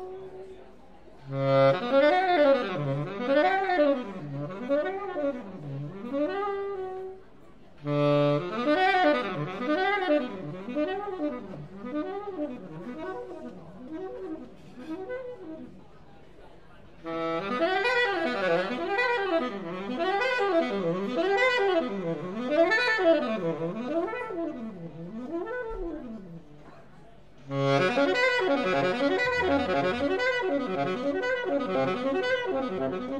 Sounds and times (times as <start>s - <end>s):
Jazz: 1.2s - 16.0s, 17.0s - 26.7s, 27.4s - 33.1s.